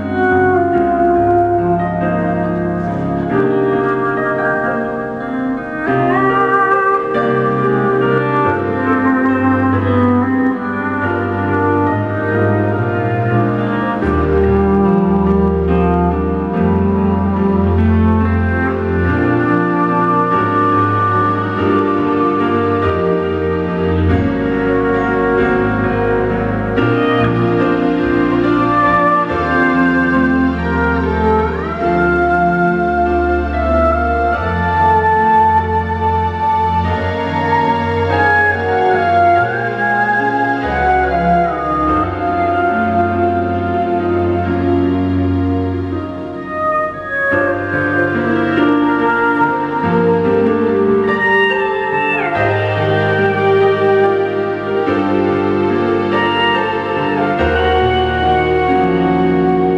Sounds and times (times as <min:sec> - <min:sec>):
Wedding music: 0:00.0 - 0:59.7.